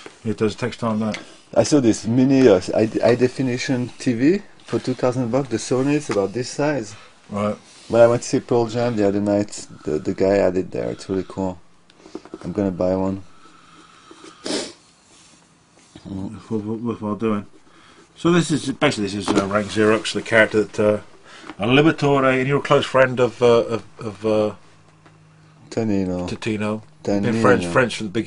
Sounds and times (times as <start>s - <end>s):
Inside, small room: 0.0s - 28.2s
Speech: 0.2s - 11.6s, 12.4s - 13.3s, 16.0s - 17.5s, 18.2s - 24.6s, 25.7s - 28.2s.